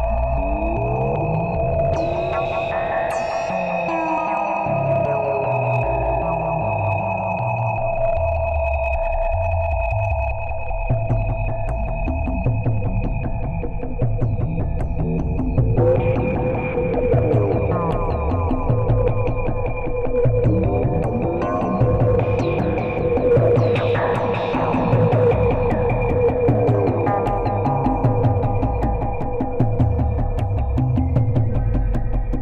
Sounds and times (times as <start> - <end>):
Music: 0.0 - 32.4.